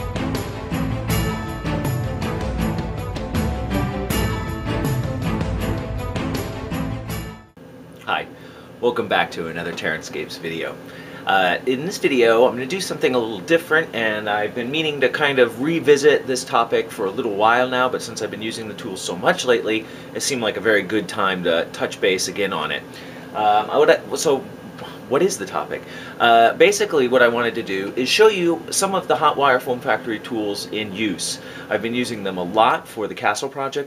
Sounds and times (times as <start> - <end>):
Speech: 8.0 - 24.5, 25.1 - 33.8.